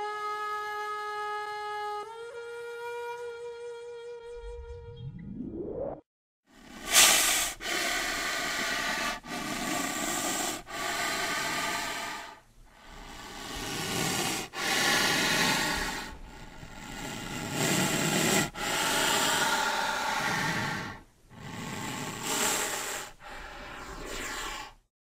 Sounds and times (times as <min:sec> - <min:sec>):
Hiss: 0:06.6 - 0:24.8.